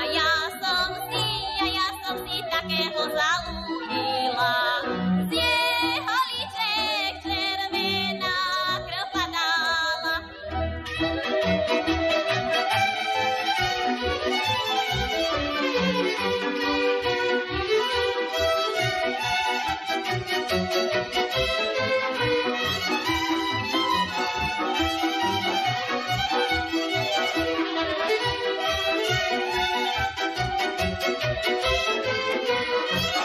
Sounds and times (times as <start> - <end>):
Violin, fiddle: 0.0 - 33.2.